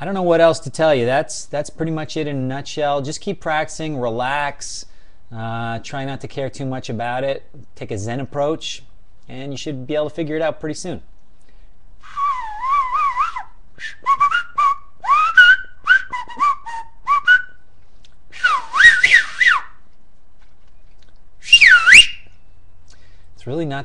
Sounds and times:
Speech: 0:00.0 - 0:11.1, 0:23.4 - 0:23.8
Whistling: 0:12.0 - 0:17.6, 0:18.3 - 0:19.8, 0:21.4 - 0:22.4.

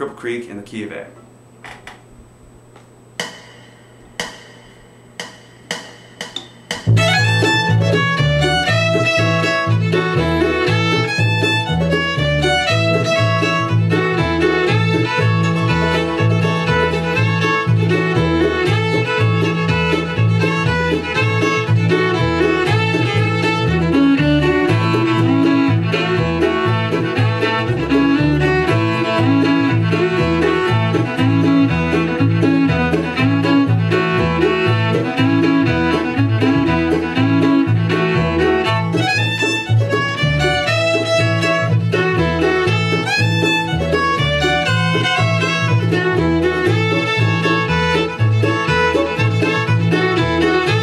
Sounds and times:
Violin, fiddle: 0:06.9 - 0:50.8.

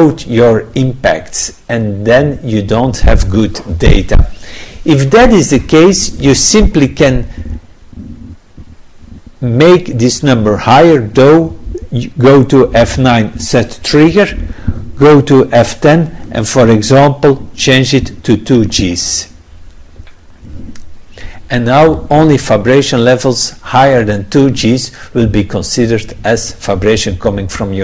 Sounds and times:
Speech: 0:00.0 - 0:07.3, 0:09.4 - 0:14.4, 0:15.0 - 0:19.4, 0:21.5 - 0:27.8.

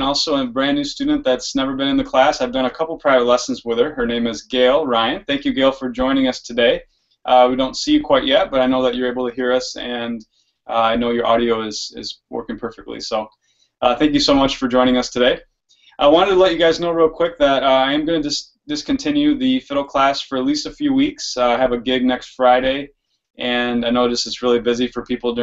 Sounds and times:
Speech: 0:00.0 - 0:25.4.

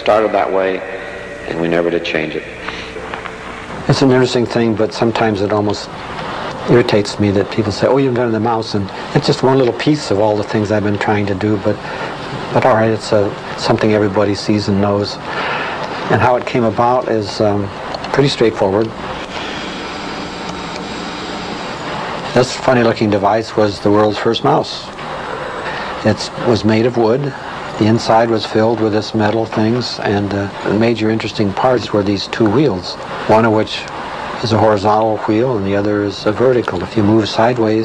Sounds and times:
Speech: 0:00.0 - 0:03.0, 0:03.8 - 0:19.0, 0:22.3 - 0:25.0, 0:25.7 - 0:37.8.

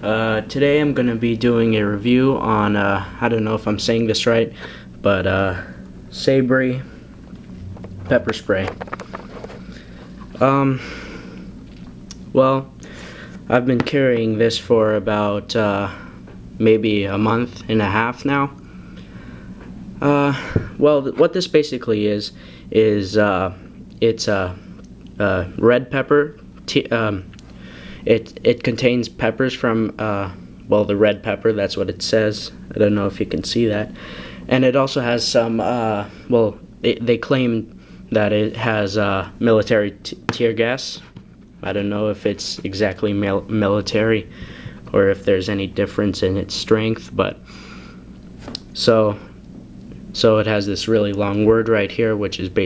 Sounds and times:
Speech: 0:00.0 - 0:07.0, 0:08.0 - 0:08.8, 0:10.4 - 0:10.8, 0:12.3 - 0:12.7, 0:13.5 - 0:16.0, 0:16.6 - 0:18.6, 0:20.0 - 0:24.6, 0:25.2 - 0:27.3, 0:28.1 - 0:33.9, 0:34.5 - 0:44.3, 0:44.9 - 0:47.4, 0:48.8 - 0:49.3, 0:50.2 - 0:52.6.

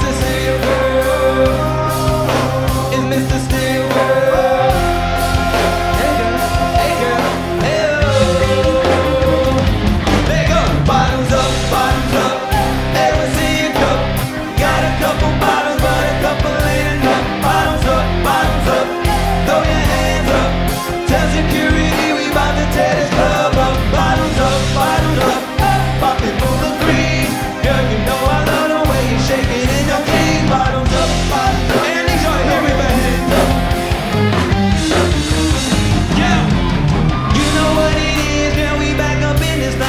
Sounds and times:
Music: 0:00.0 - 0:39.8.

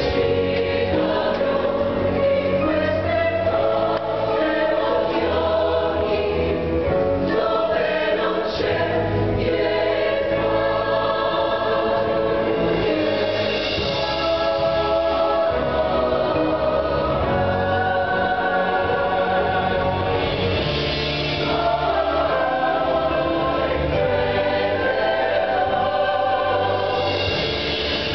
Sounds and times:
Choir: 0:00.0 - 0:28.1.

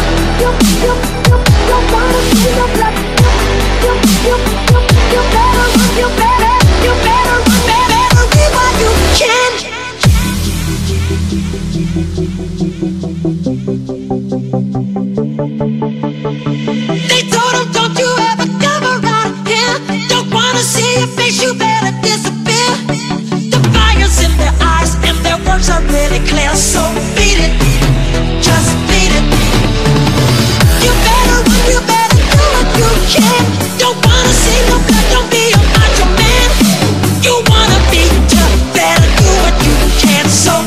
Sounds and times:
Dubstep: 0:00.0 - 0:40.6.

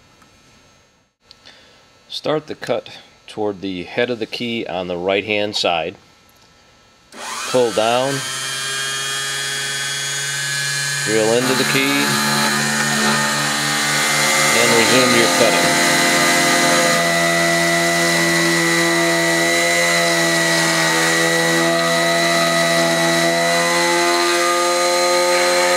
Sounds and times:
Speech: 0:02.1 - 0:06.0, 0:07.5 - 0:08.2, 0:11.1 - 0:12.3, 0:14.5 - 0:15.8.

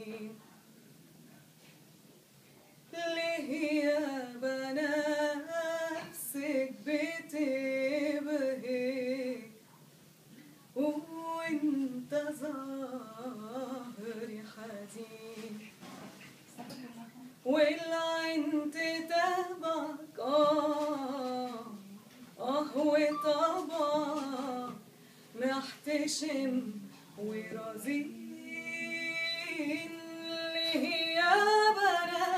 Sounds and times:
Female singing: 0:00.0 - 0:00.4, 0:02.9 - 0:09.6, 0:10.8 - 0:15.7, 0:17.4 - 0:24.8, 0:25.4 - 0:32.3.

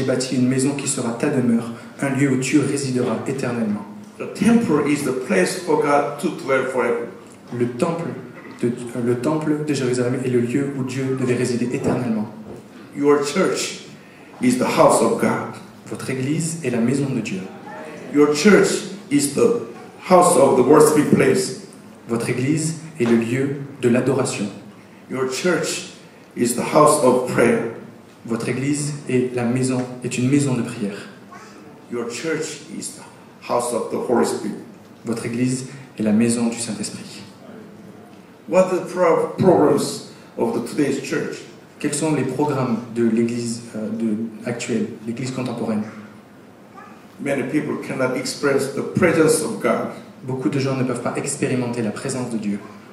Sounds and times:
Speech: 0:00.0 - 0:31.2, 0:31.9 - 0:46.1, 0:47.2 - 0:52.8.

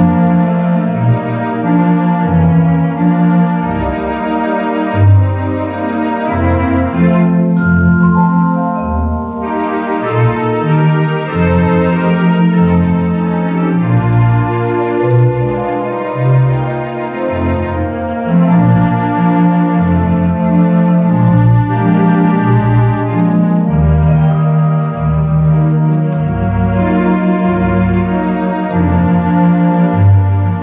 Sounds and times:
Electric piano: 0:00.0 - 0:30.6
Organ: 0:00.0 - 0:30.6.

